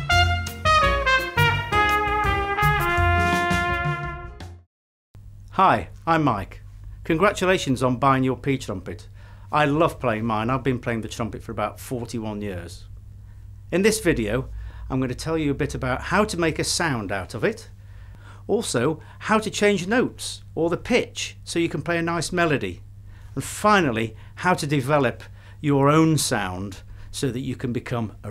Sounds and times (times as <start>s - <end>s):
Speech: 5.6s - 12.9s, 13.7s - 17.7s, 18.5s - 22.8s, 23.4s - 28.3s.